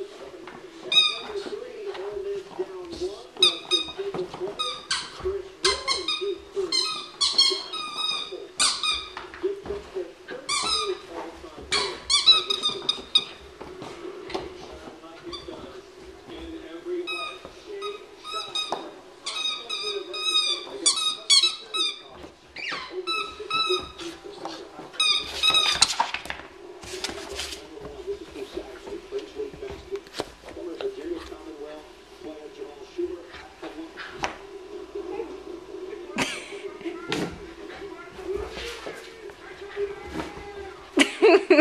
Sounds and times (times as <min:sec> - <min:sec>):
Speech: 0:00.0 - 0:08.6, 0:09.4 - 0:13.0, 0:14.3 - 0:25.8, 0:26.9 - 0:41.0.